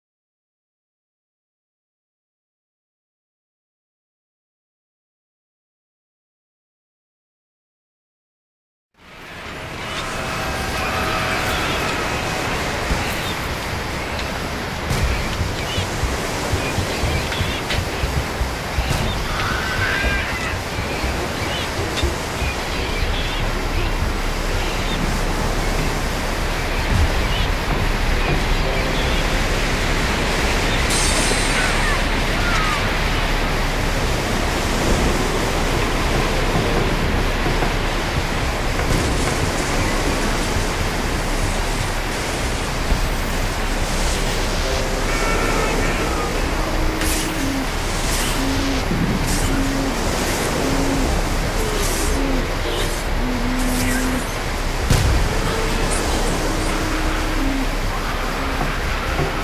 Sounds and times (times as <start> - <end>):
Outside, rural or natural: 8.9 - 59.4
Waves, surf: 9.0 - 59.4.